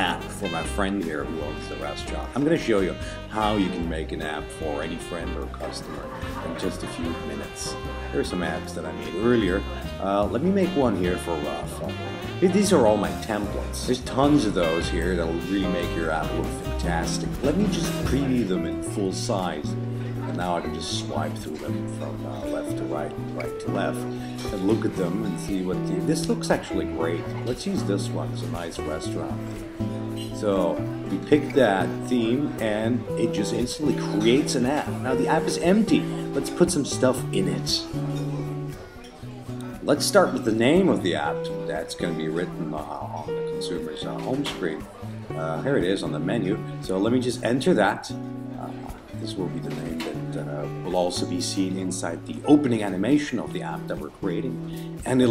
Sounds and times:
Speech: 0:00.0 - 0:29.4, 0:30.2 - 0:38.0, 0:39.6 - 0:55.3
Music: 0:00.0 - 0:55.3.

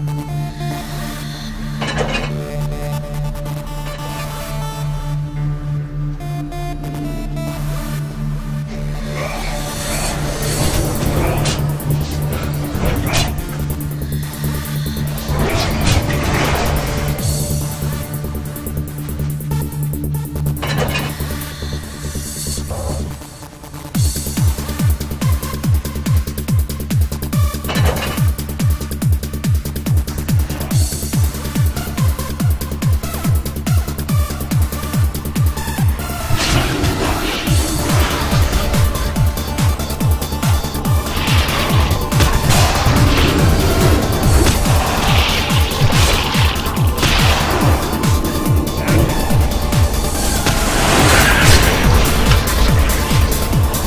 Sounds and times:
Music: 0:00.0 - 0:53.8.

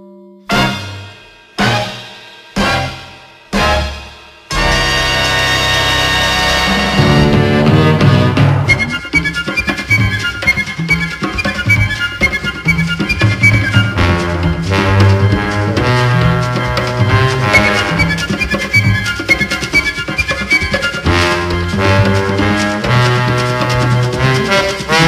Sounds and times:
Soundtrack music: 0:00.5 - 0:09.2, 0:13.2 - 0:19.4
Theme music: 0:00.5 - 0:10.4, 0:12.6 - 0:25.0.

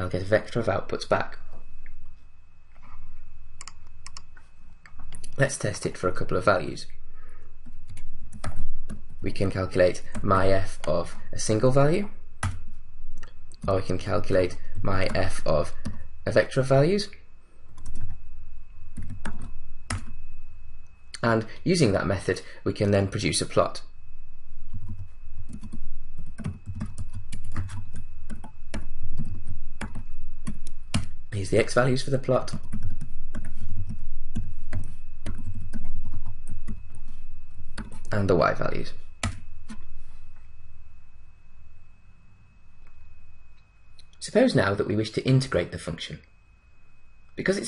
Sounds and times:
Speech: 0:00.0 - 0:01.4, 0:05.3 - 0:06.9, 0:09.2 - 0:12.2, 0:13.6 - 0:17.2, 0:21.2 - 0:23.9, 0:31.3 - 0:32.6, 0:38.1 - 0:39.0, 0:44.2 - 0:46.3, 0:47.4 - 0:47.6.

